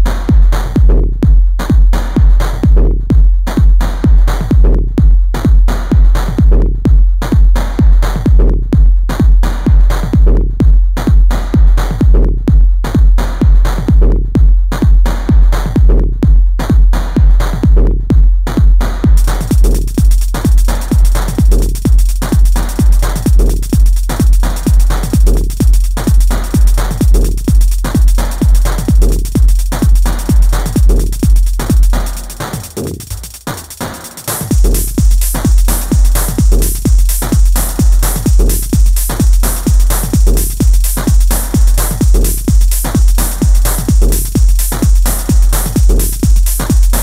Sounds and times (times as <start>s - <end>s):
Techno: 0.0s - 47.0s.